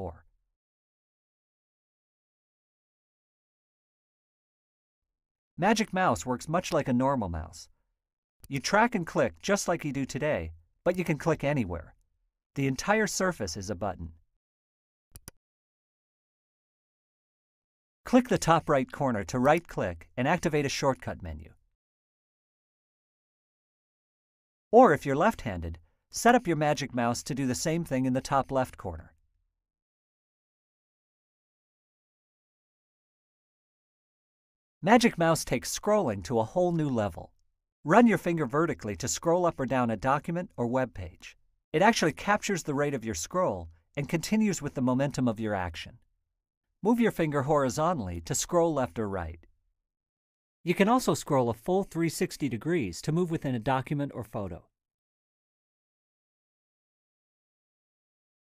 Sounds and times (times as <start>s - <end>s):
Speech: 0.0s - 0.2s, 5.6s - 7.7s, 8.5s - 12.0s, 12.6s - 14.2s, 18.1s - 21.6s, 24.8s - 29.1s, 34.8s - 37.3s, 37.9s - 46.0s, 46.8s - 49.4s, 50.7s - 54.7s.